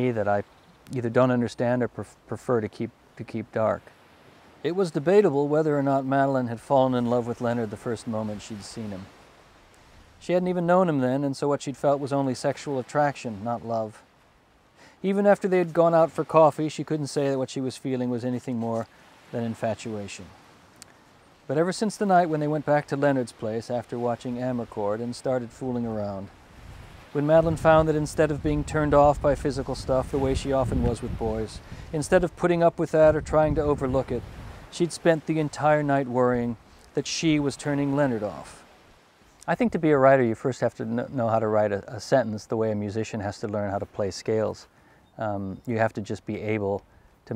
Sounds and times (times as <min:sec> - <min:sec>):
Speech: 0:00.0 - 0:03.9, 0:04.6 - 0:09.1, 0:10.2 - 0:14.0, 0:15.0 - 0:20.4, 0:21.5 - 0:26.3, 0:27.2 - 0:38.6, 0:39.4 - 0:47.3.